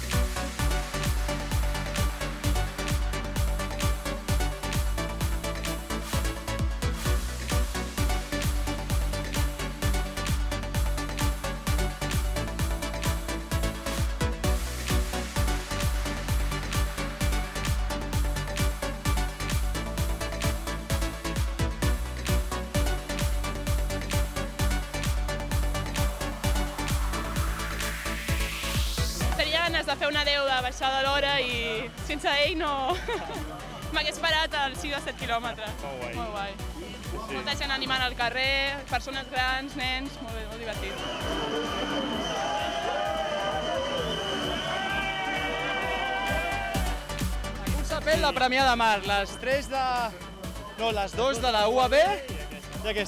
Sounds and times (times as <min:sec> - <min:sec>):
Music: 0:00.0 - 0:53.0.